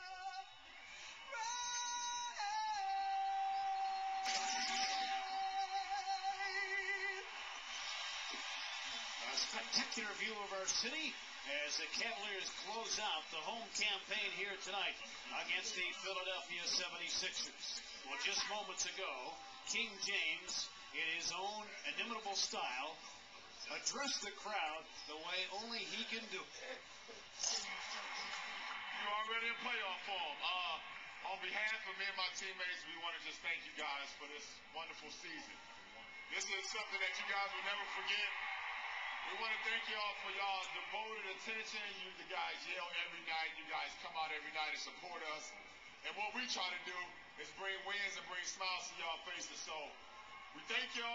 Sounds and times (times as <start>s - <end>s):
Male speech, man speaking: 9.2s - 23.0s, 23.6s - 27.7s, 28.9s - 35.6s, 36.3s - 38.4s, 39.2s - 50.0s, 50.6s - 51.1s.